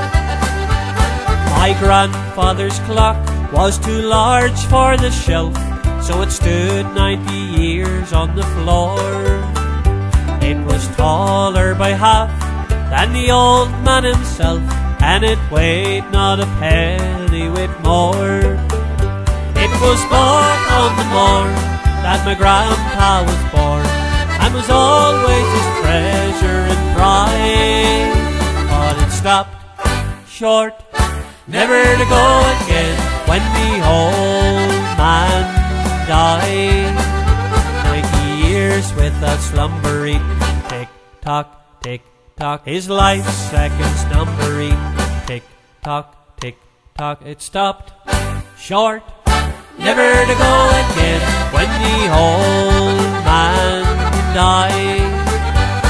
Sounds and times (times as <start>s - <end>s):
Music: 0.0s - 46.8s, 47.8s - 55.9s
Male singing: 1.4s - 9.5s, 10.4s - 18.6s, 19.6s - 29.6s, 30.3s - 30.9s, 31.5s - 37.2s, 37.8s - 47.9s, 48.6s - 49.2s, 49.8s - 55.5s.